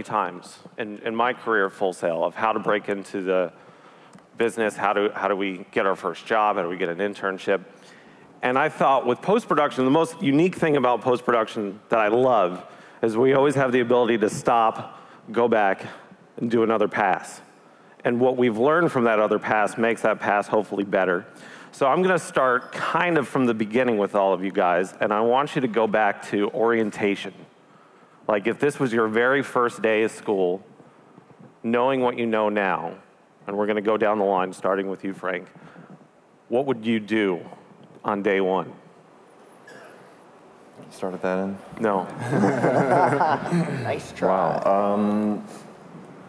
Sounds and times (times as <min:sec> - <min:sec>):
Speech: 0:00.0 - 0:03.5.